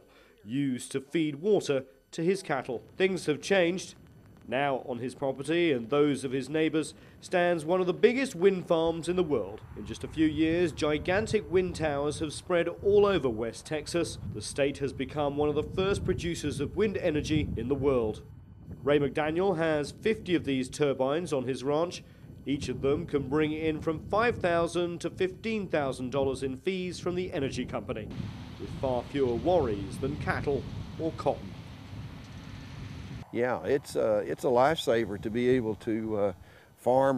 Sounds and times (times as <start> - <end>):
Speech: 0.4 - 18.2, 18.8 - 31.4, 33.3 - 37.1
Wind noise (microphone): 9.3 - 33.2.